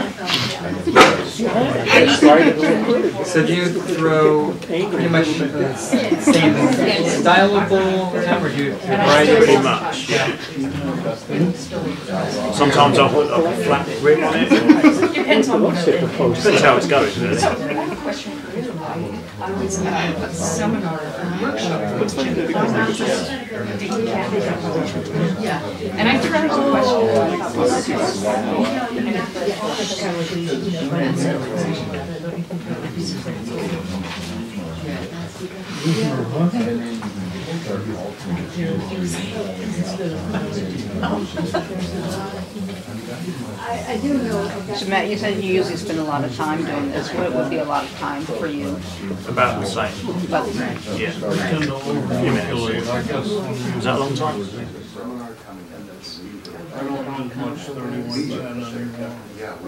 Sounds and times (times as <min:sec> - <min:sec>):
Speech: 0:00.0 - 0:59.6.